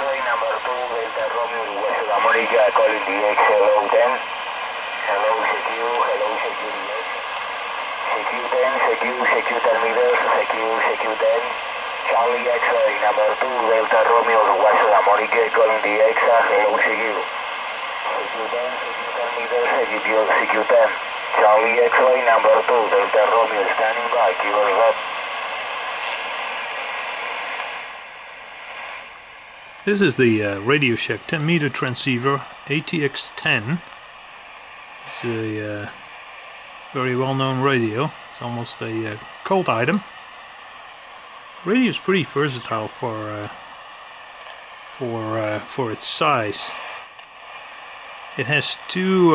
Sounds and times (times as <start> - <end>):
Speech: 0.0 - 4.3, 5.0 - 7.2, 8.1 - 17.3, 18.0 - 25.0, 29.9 - 33.9, 35.0 - 36.0, 37.0 - 40.1, 41.5 - 43.6, 44.9 - 47.0, 48.4 - 49.3
Radio: 0.0 - 29.1, 29.7 - 49.3.